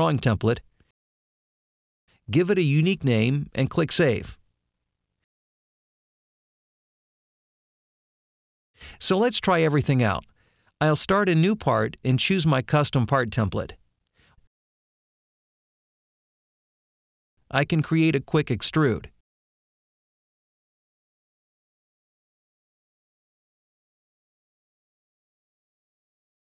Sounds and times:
Speech: 0.0s - 0.6s, 2.3s - 4.4s, 9.0s - 13.8s, 17.5s - 19.2s.

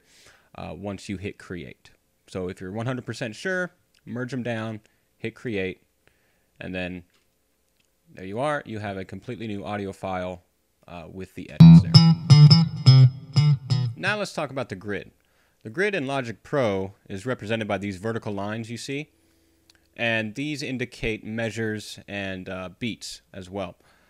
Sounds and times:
Bass guitar: 11.6s - 14.1s.

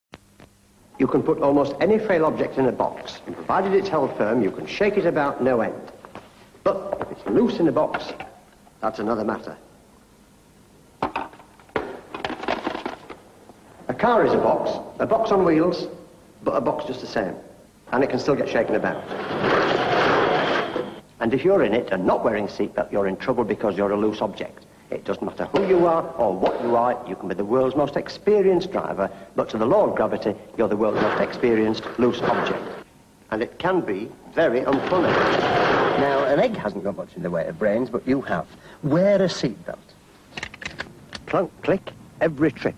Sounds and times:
Speech: 1.0s - 6.0s, 6.6s - 9.7s, 13.9s - 19.0s, 21.2s - 35.2s, 36.0s - 40.0s, 41.3s - 42.7s.

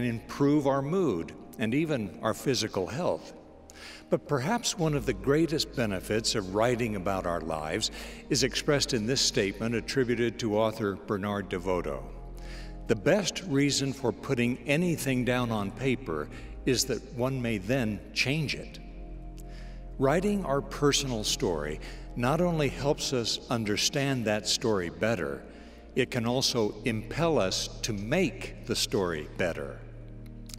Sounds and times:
Speech: 0.0s - 3.4s, 4.1s - 12.2s, 12.9s - 18.8s, 20.0s - 29.9s
Music: 0.0s - 30.5s.

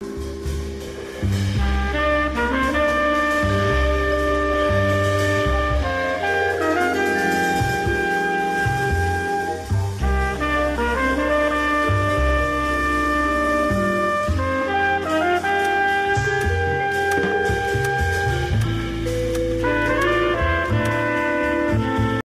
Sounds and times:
Music: 0.0s - 22.2s.

